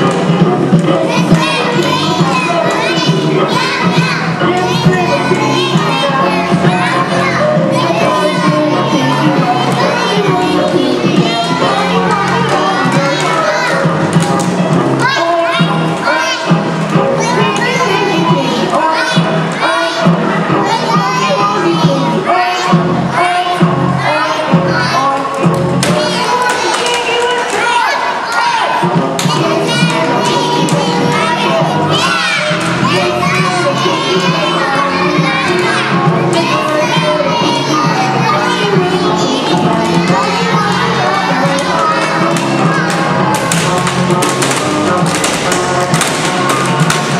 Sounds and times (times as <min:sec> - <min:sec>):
Music: 0:00.0 - 0:47.1.